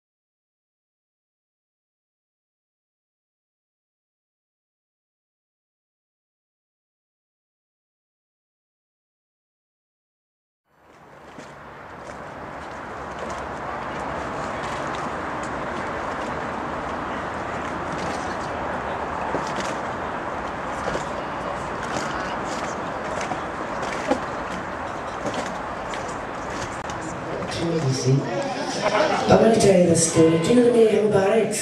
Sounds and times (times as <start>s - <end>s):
Speech: 27.4s - 31.6s.